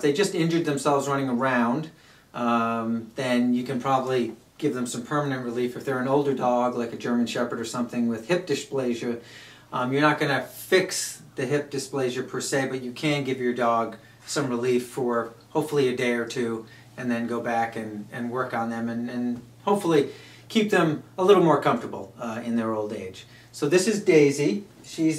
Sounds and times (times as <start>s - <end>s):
Speech: 0.0s - 25.1s.